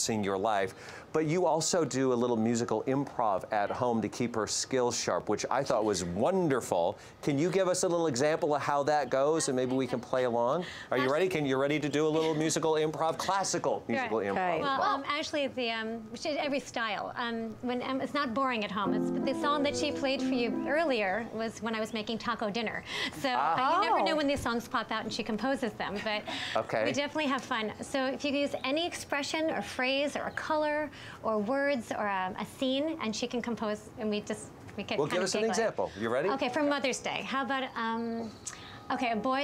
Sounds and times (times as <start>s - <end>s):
Tender music: 18.8s - 21.3s.